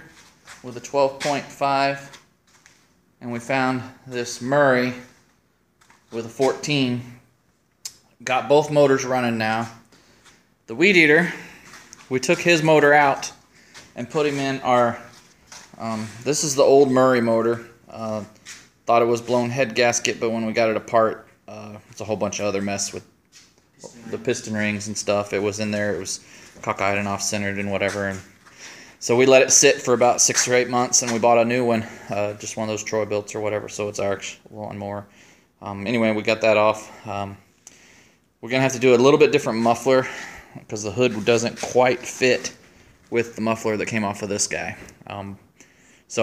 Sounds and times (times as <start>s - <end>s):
Speech: 0.0s - 2.2s, 3.2s - 5.2s, 6.1s - 7.2s, 8.2s - 9.8s, 10.7s - 11.5s, 12.1s - 13.4s, 14.0s - 15.2s, 15.8s - 23.1s, 23.8s - 28.3s, 29.0s - 37.4s, 38.4s - 45.4s.